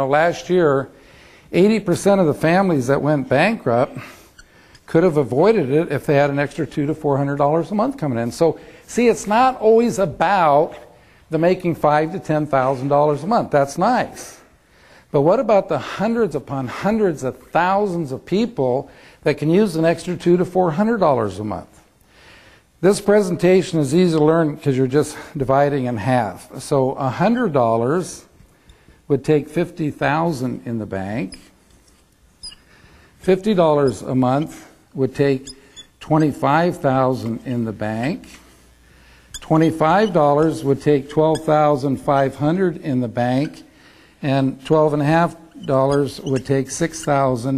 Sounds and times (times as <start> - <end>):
Speech: 0.0 - 4.2, 4.9 - 14.5, 15.1 - 21.8, 22.8 - 28.4, 29.1 - 31.5, 33.2 - 38.5, 39.4 - 47.5.